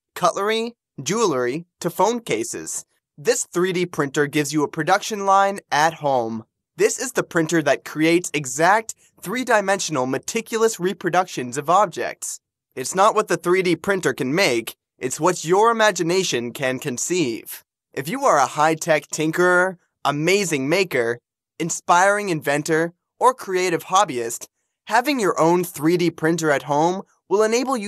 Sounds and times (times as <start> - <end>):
Speech: 0.1 - 27.8.